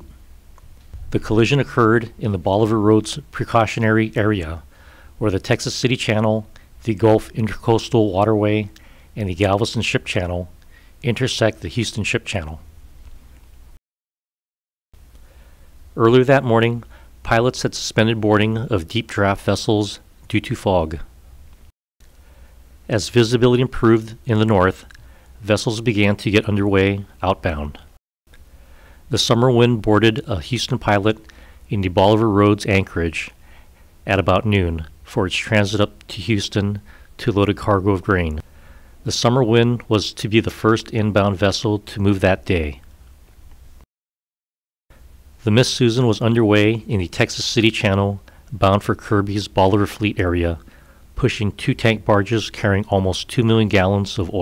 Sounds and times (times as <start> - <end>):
Speech: 1.1 - 12.7, 16.0 - 21.1, 22.9 - 27.9, 29.1 - 33.4, 34.1 - 38.4, 39.0 - 42.9, 45.4 - 54.4.